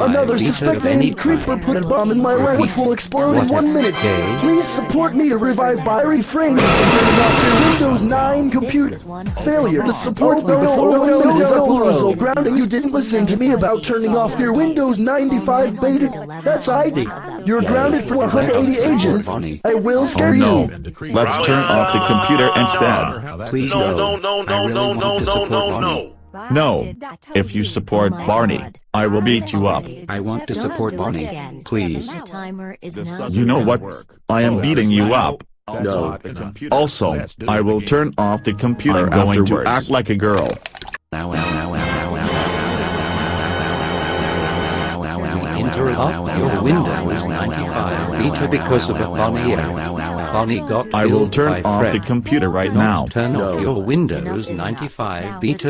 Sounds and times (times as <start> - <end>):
Speech: 0.0 - 40.6, 45.0 - 55.6.